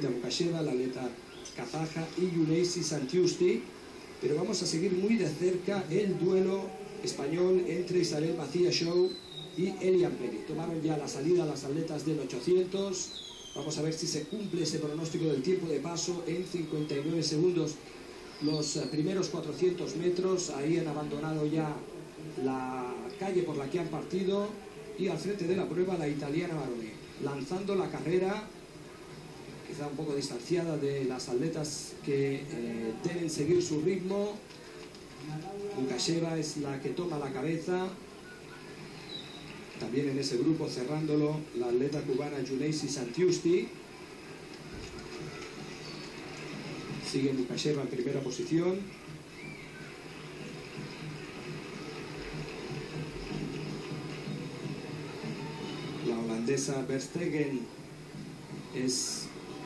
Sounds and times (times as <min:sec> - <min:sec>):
Speech: 0:00.0 - 0:17.8, 0:18.4 - 0:28.5, 0:29.7 - 0:34.4, 0:35.2 - 0:38.0, 0:39.8 - 0:43.8, 0:47.0 - 0:48.9, 0:56.0 - 0:57.7.